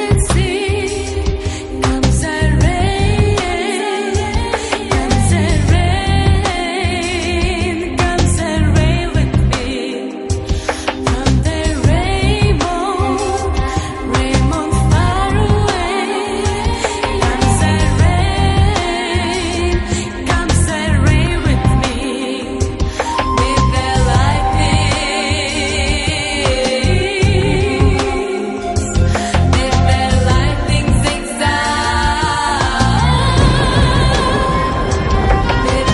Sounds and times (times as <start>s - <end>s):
Music: 0.0s - 35.9s.